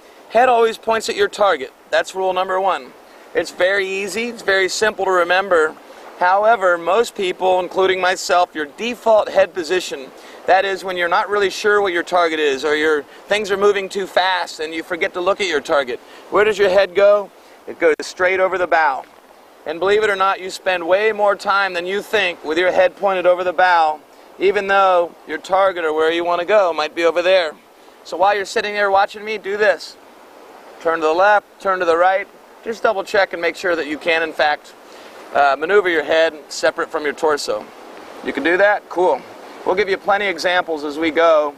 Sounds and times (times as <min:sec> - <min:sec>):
Speech: 0:00.3 - 0:30.0, 0:30.8 - 0:41.5.